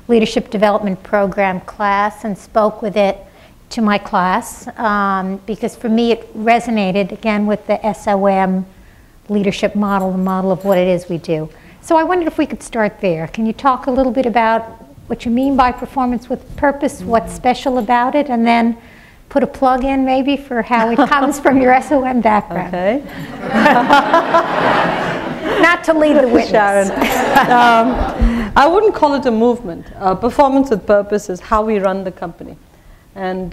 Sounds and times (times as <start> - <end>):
Female speech, woman speaking: 0.1 - 8.7, 9.3 - 23.0, 25.6 - 32.6, 33.2 - 33.5
Conversation: 9.3 - 32.5.